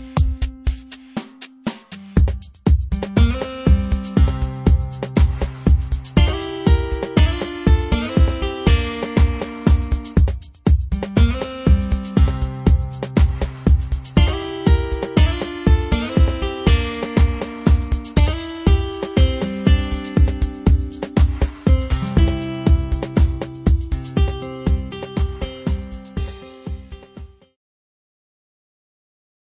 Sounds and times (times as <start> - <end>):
Electronica: 0.0 - 27.5.